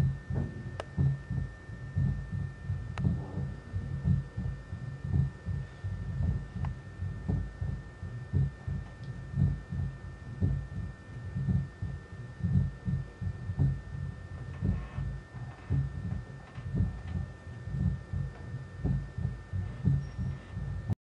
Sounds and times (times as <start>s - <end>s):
Heart sounds, heartbeat: 0.0s - 21.0s
Hum: 0.0s - 21.0s
Throbbing: 0.0s - 21.0s.